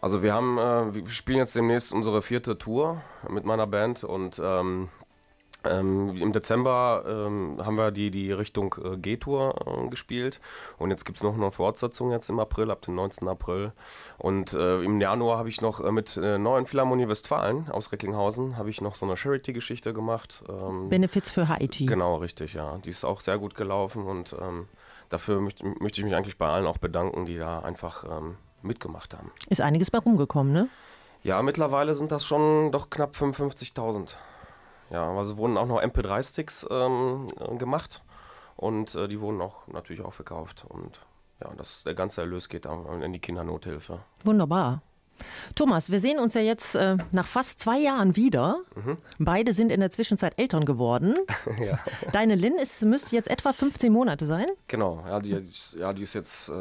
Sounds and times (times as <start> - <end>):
Speech: 0.0 - 5.0, 5.6 - 34.2, 34.9 - 38.0, 38.6 - 44.8, 45.6 - 56.6.